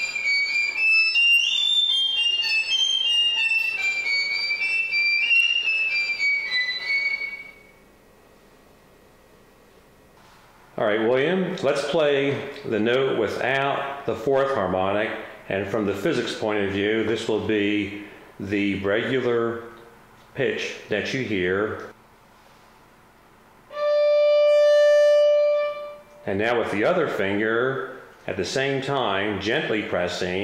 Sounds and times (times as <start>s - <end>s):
Speech: 10.8s - 22.0s, 26.2s - 30.4s.